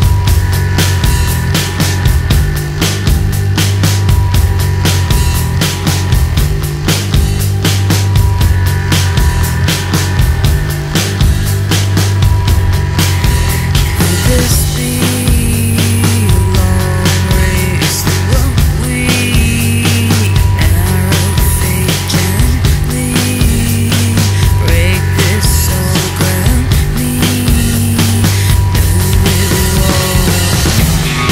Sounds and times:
Music: 0.0s - 31.3s.

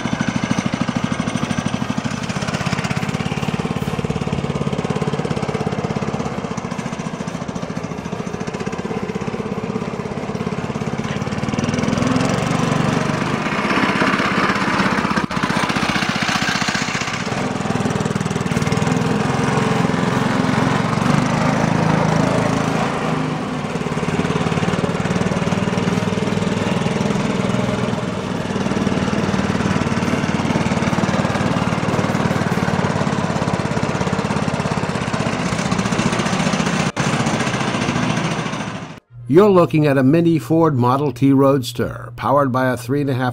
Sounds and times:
Lawn mower: 0.0s - 39.1s
Vehicle: 0.0s - 39.2s.

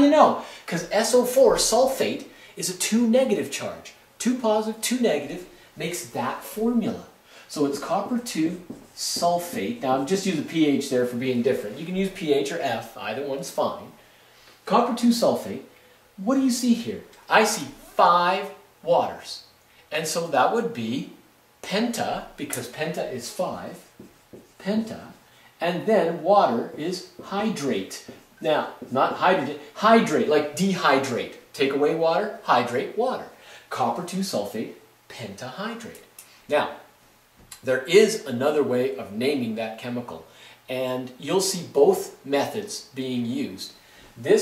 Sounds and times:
Speech: 0.0s - 14.0s, 14.6s - 24.0s, 24.6s - 36.9s, 37.6s - 44.4s.

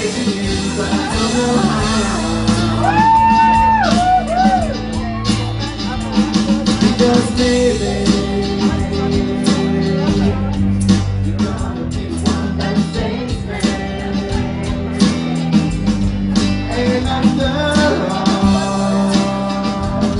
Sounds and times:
Guitar: 0.0s - 20.1s
Speech: 4.8s - 12.4s.

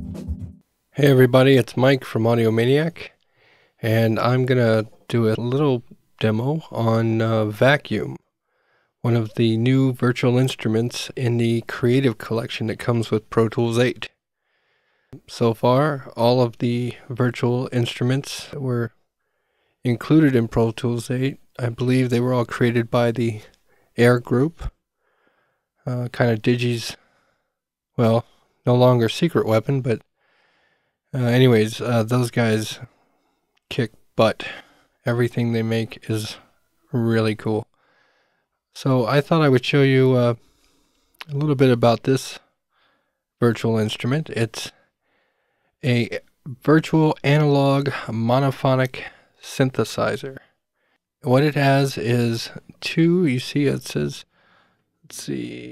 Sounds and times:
Speech: 1.0s - 3.2s, 3.8s - 8.2s, 9.0s - 14.2s, 15.2s - 18.9s, 19.8s - 24.8s, 25.8s - 27.0s, 28.0s - 30.0s, 31.1s - 32.9s, 33.7s - 37.7s, 38.8s - 40.4s, 41.2s - 42.5s, 43.4s - 44.8s, 45.8s - 50.5s, 51.2s - 54.3s, 55.1s - 55.7s.

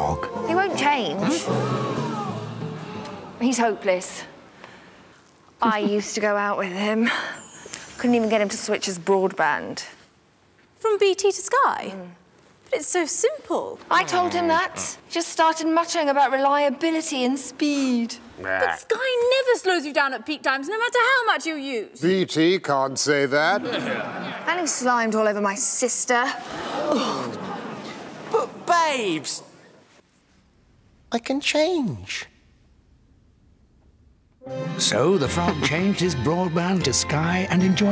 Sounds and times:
Music: 0.0s - 3.4s, 34.4s - 37.9s.

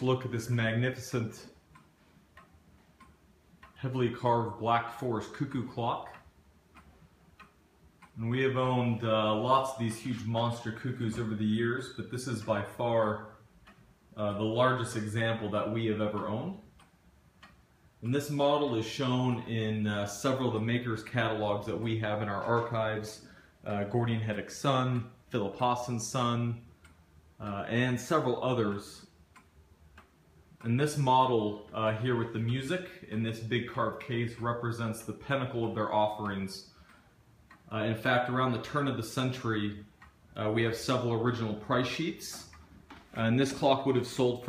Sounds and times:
Speech: 0.0s - 1.6s, 3.7s - 6.3s, 8.2s - 13.4s, 14.2s - 16.7s, 18.0s - 26.7s, 27.4s - 29.1s, 30.6s - 36.8s, 37.7s - 44.4s.

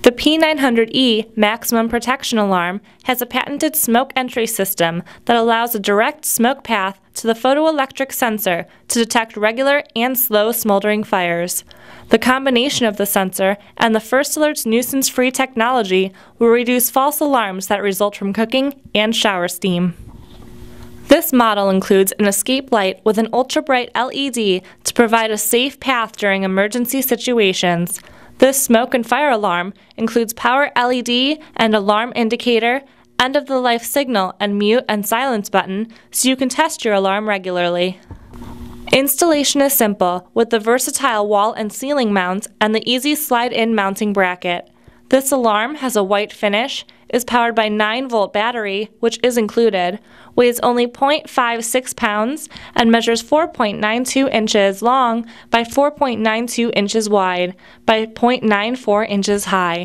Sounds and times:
Speech: 0.0s - 20.0s, 21.1s - 38.0s, 38.9s - 59.8s.

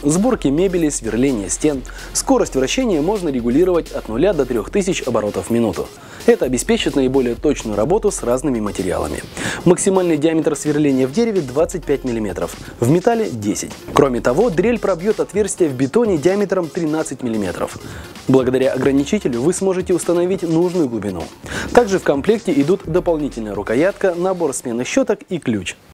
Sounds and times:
Music: 0.0s - 25.9s
Speech: 0.0s - 25.9s.

